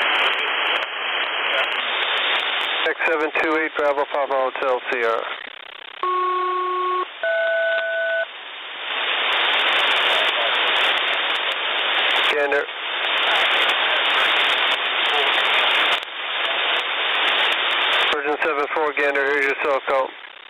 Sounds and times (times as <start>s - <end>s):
Radio: 0.0s - 6.9s, 8.9s - 20.5s
Speech: 1.5s - 1.8s, 2.8s - 5.3s, 10.0s - 11.2s, 12.3s - 15.8s, 16.4s - 16.9s, 18.2s - 20.2s.